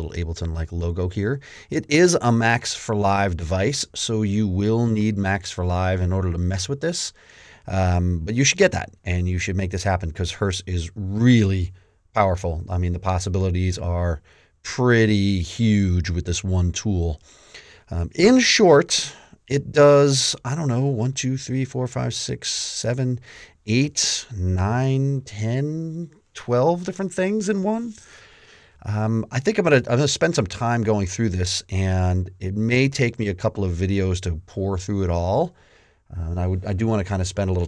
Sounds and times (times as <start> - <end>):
Speech: 0.0 - 17.2, 17.9 - 28.0, 28.8 - 37.6.